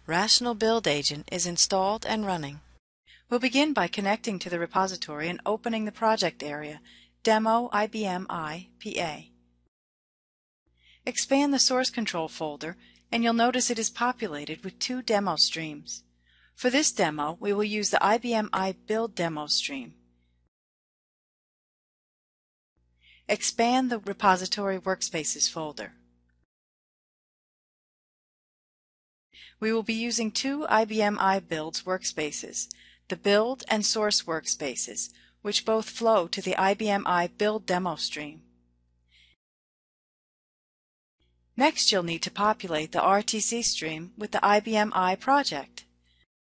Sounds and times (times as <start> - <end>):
Speech: 0.0 - 2.7, 3.3 - 9.3, 11.1 - 16.0, 16.6 - 20.0, 23.3 - 26.0, 29.6 - 38.4, 41.6 - 45.8.